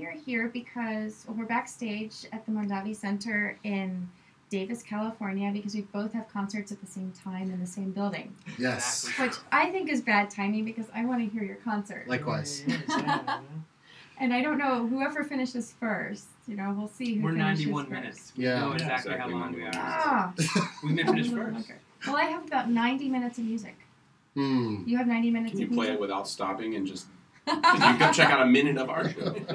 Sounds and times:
Speech: 0.0s - 13.6s, 14.2s - 23.8s, 24.4s - 29.5s.

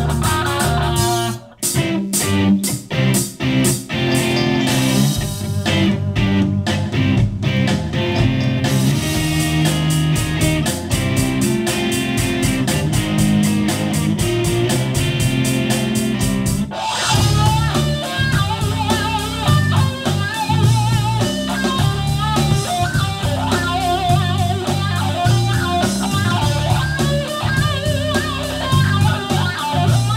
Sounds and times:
Blues: 0.0s - 30.1s
Independent music: 0.0s - 30.1s.

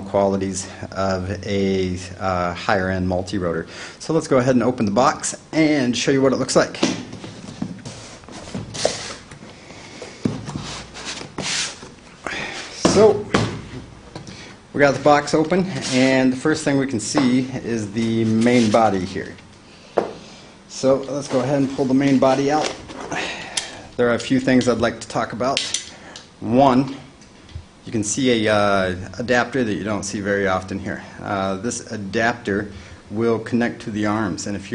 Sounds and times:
Speech: 0.0s - 7.0s, 12.7s - 13.5s, 14.8s - 19.4s, 20.7s - 22.8s, 24.0s - 25.7s, 26.4s - 27.1s, 27.8s - 34.7s.

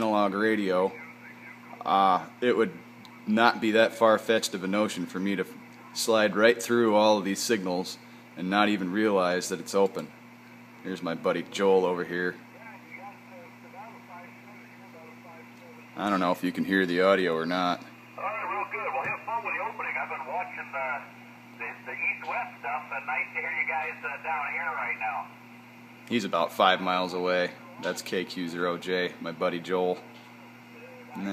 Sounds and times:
Radio: 0.0s - 3.6s, 11.9s - 16.3s, 18.2s - 25.4s, 30.7s - 31.3s
Speech: 0.0s - 10.1s, 10.8s - 25.3s, 26.1s - 30.0s.

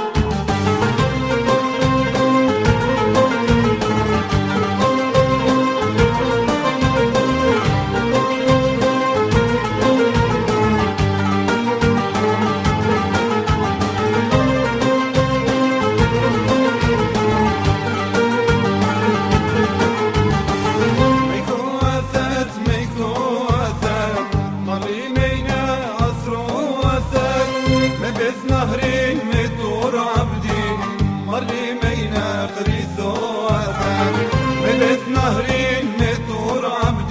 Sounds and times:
Music: 0.0s - 37.1s.

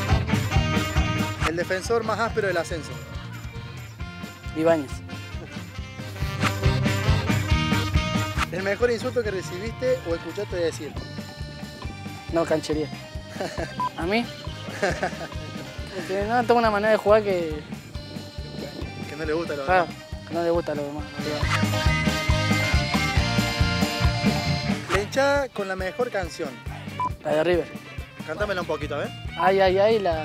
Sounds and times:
Music: 0.0s - 30.2s
Speech: 1.4s - 3.0s, 8.5s - 11.0s, 16.0s - 17.6s, 18.5s - 21.4s, 24.9s - 26.6s, 27.2s - 30.2s.

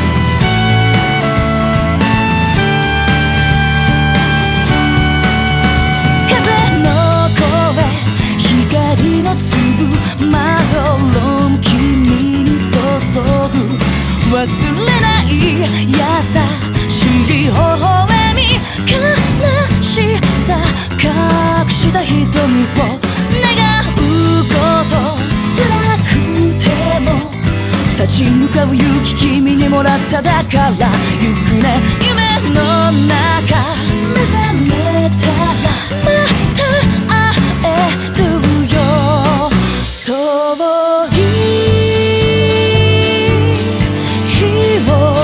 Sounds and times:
Pop music: 0.0s - 45.2s.

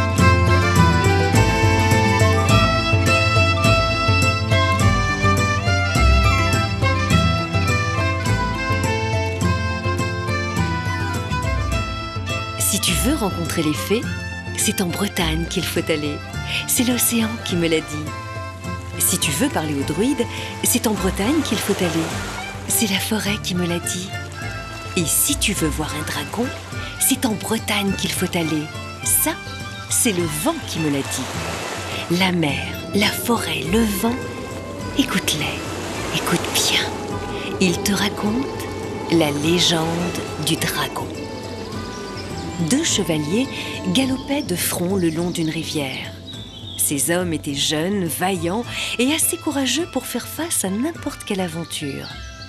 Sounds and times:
Music: 0.0s - 52.4s
Speech: 12.6s - 18.1s, 19.0s - 24.2s, 25.0s - 31.3s, 32.0s - 34.2s, 35.0s - 35.6s, 36.2s - 41.2s, 42.6s - 46.2s, 46.8s - 52.2s.

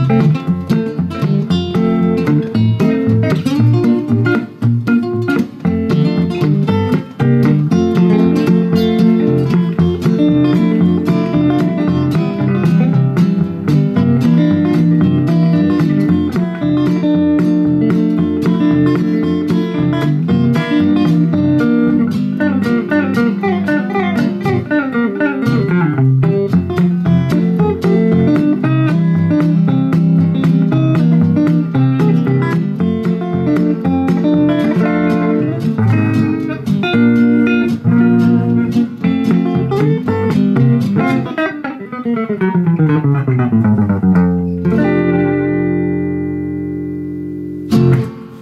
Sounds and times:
Inside, small room: 0.0s - 48.4s
Tapping (guitar technique): 0.0s - 48.4s.

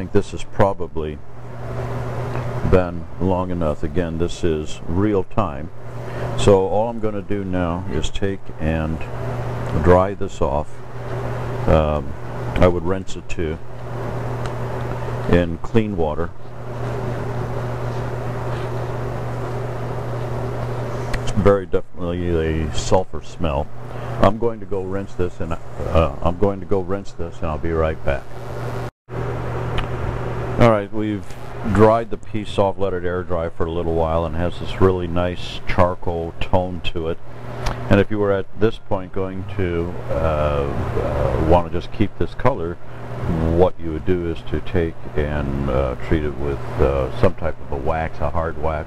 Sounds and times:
Speech: 0.0s - 1.2s, 2.6s - 5.7s, 6.4s - 9.1s, 9.7s - 10.8s, 11.7s - 13.6s, 15.3s - 16.4s, 21.3s - 28.3s, 30.6s - 37.2s, 37.9s - 48.8s.

